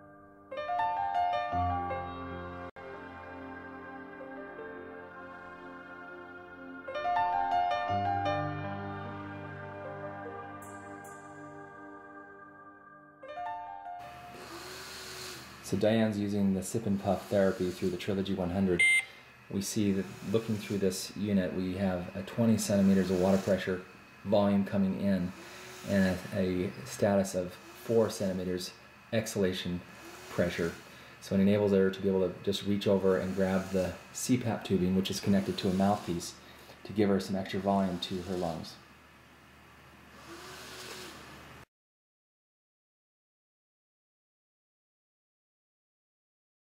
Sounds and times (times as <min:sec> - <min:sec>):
Speech: 0:15.6 - 0:18.8, 0:19.5 - 0:38.8
Beep, bleep: 0:18.8 - 0:19.1.